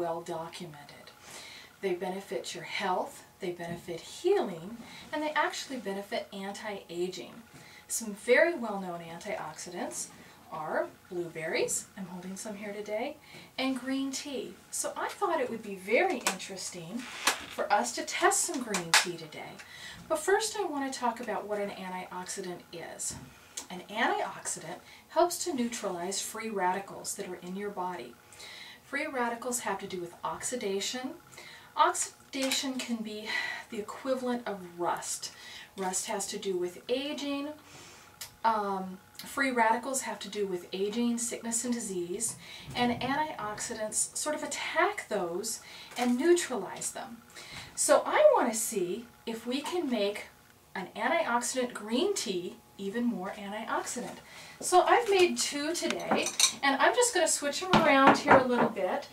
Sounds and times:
Speech: 0.0 - 1.1, 1.8 - 17.0, 17.6 - 28.1, 28.9 - 31.2, 31.8 - 37.6, 38.4 - 47.2, 47.8 - 59.1.

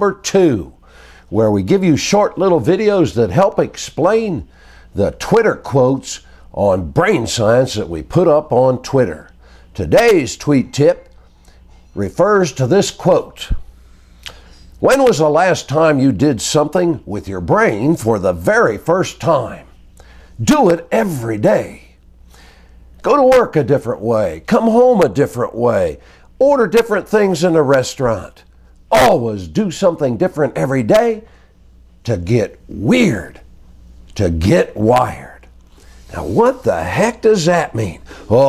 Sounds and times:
Speech: 0.0 - 11.2, 12.0 - 13.6, 14.8 - 19.7, 20.4 - 22.0, 23.0 - 31.3, 32.0 - 33.5, 34.1 - 35.5, 36.1 - 38.4.

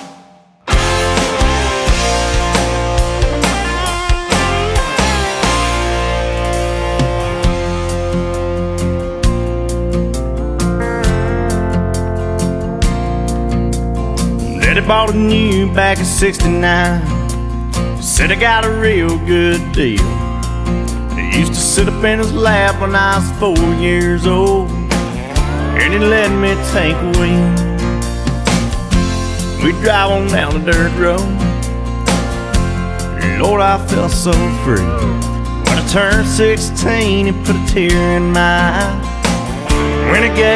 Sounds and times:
Music: 0.0 - 40.5.

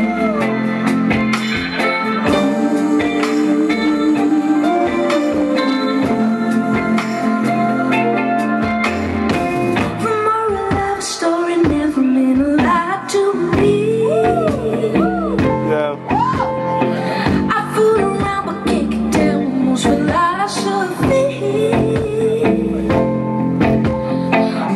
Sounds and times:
Music: 0.0 - 24.7
Speech: 15.7 - 16.0.

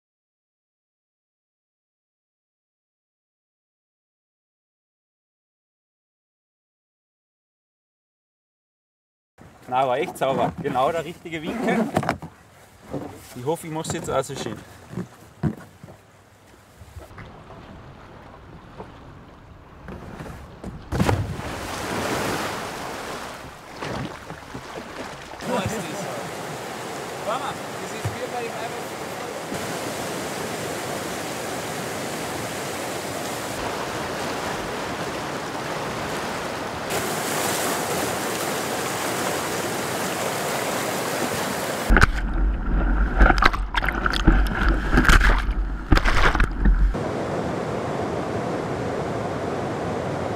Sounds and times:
Boat, Water vehicle: 9.4 - 50.3
Stream: 9.4 - 50.3.

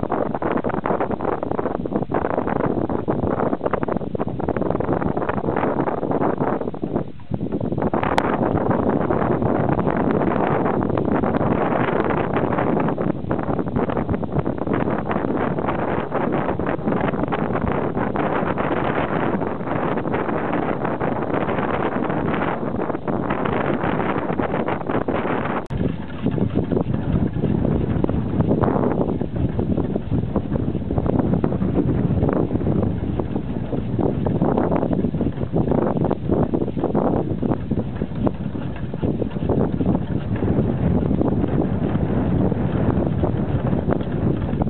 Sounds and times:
Wind noise (microphone): 0.0 - 44.7.

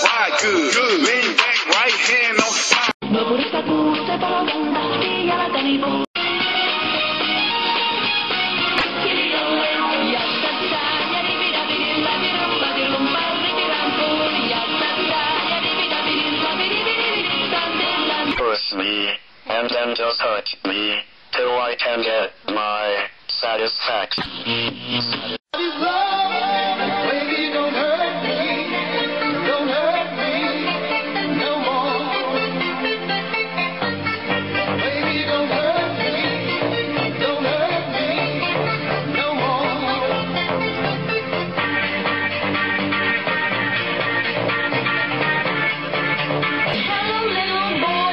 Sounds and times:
Singing: 0.0 - 6.1, 8.8 - 18.4, 25.6 - 41.2, 46.7 - 48.1.

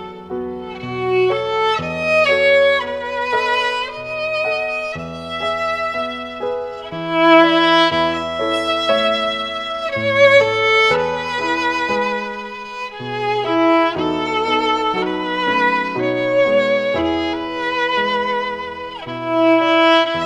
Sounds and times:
Violin, fiddle: 0.0 - 20.2.

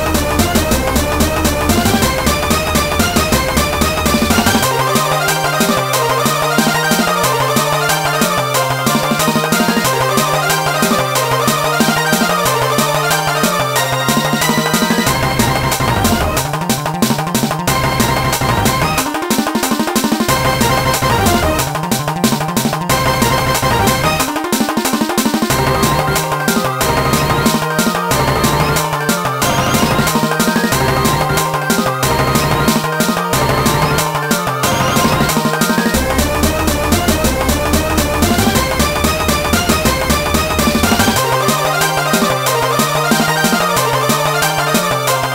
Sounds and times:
Video game music: 0.0 - 45.3.

